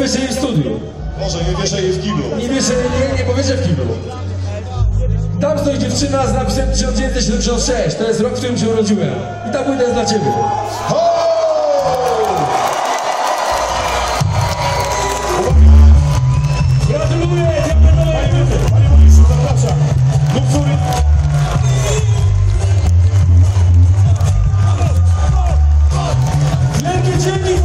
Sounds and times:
Crowd: 0.0 - 27.6.

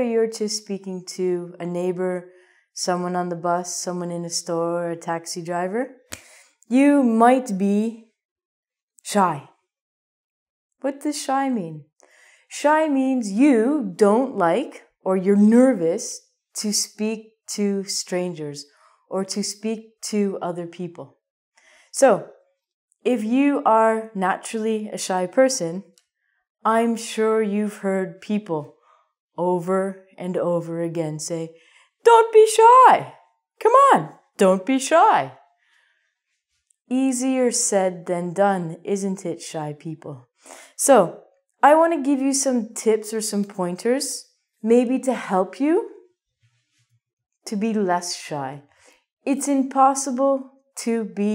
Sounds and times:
Speech: 0.0 - 2.2, 2.8 - 6.0, 6.7 - 8.1, 9.0 - 9.5, 10.8 - 11.8, 12.5 - 21.1, 22.0 - 22.3, 23.1 - 25.9, 26.7 - 28.7, 29.4 - 35.4, 36.9 - 45.9, 47.5 - 48.7, 49.3 - 51.3.

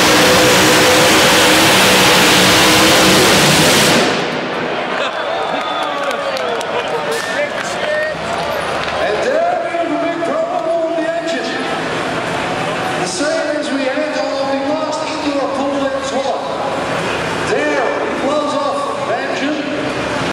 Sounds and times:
Speech: 5.8 - 11.7, 13.0 - 16.8, 17.4 - 19.9.

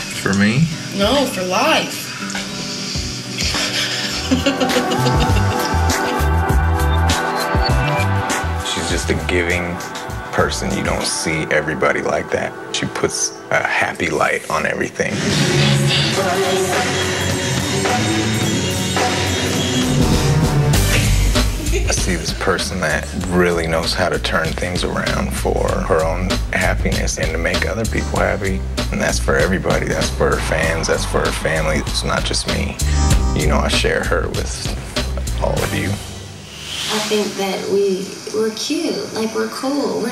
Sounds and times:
Music: 0.0 - 40.1
Speech: 0.2 - 1.9, 8.7 - 15.2, 21.7 - 36.0.

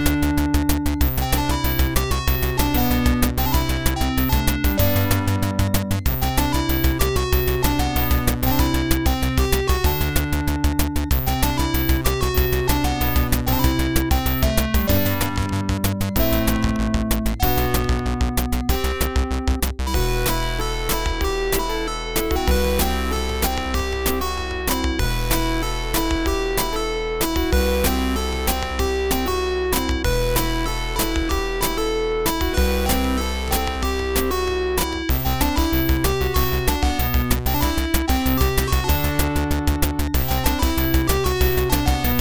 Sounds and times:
Rhythm and blues: 0.0 - 42.2.

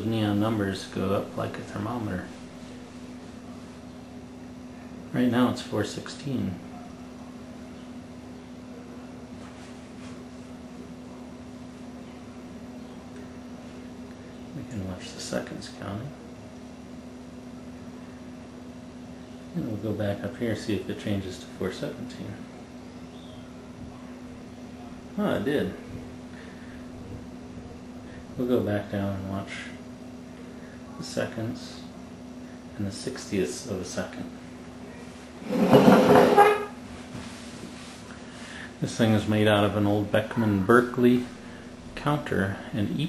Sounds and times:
Speech: 0.0 - 2.4, 4.9 - 7.2, 13.0 - 16.3, 19.5 - 22.6, 23.8 - 26.1, 27.7 - 29.9, 30.8 - 32.0, 32.8 - 35.3, 38.8 - 43.0.

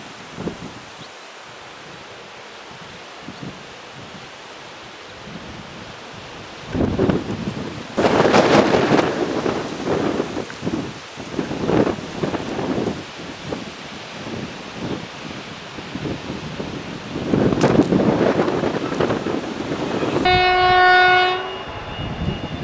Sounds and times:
Railroad car, train wagon: 0.0 - 22.6
Train horn: 19.8 - 22.6.

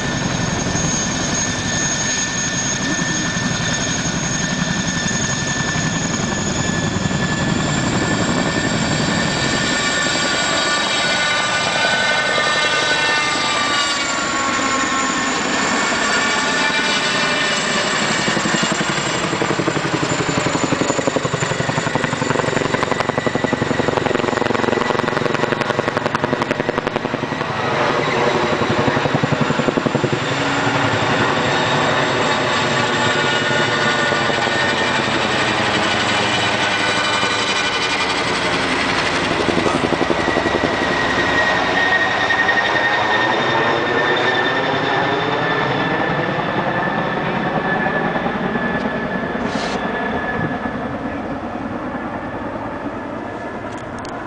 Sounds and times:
Helicopter: 0.0 - 54.2.

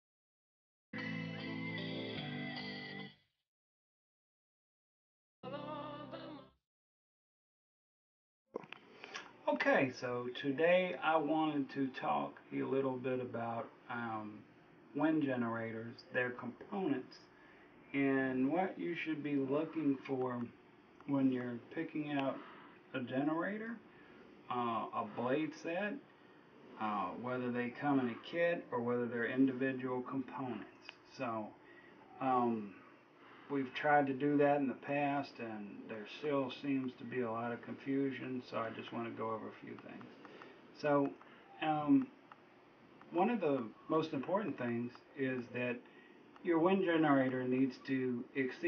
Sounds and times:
Speech: 9.4 - 17.3, 17.9 - 23.8, 24.5 - 26.0, 26.8 - 31.6, 32.2 - 32.8, 33.5 - 40.1, 40.8 - 42.2, 43.1 - 45.8, 46.4 - 48.6.

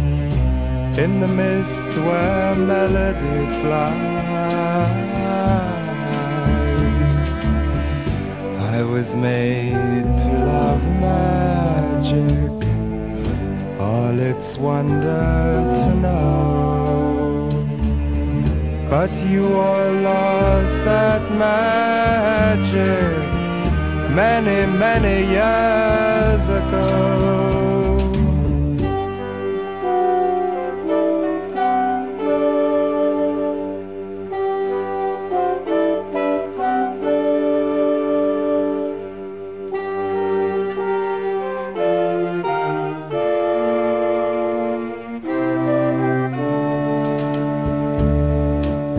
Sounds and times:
Bowed string instrument: 0.0 - 48.9.

